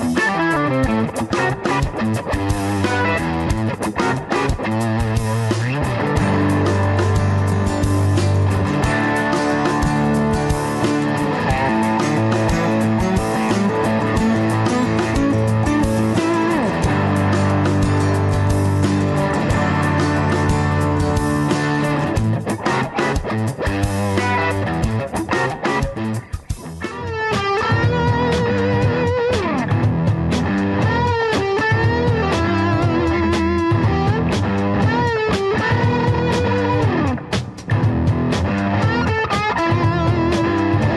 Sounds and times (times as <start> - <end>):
Bass guitar: 0.0 - 40.9.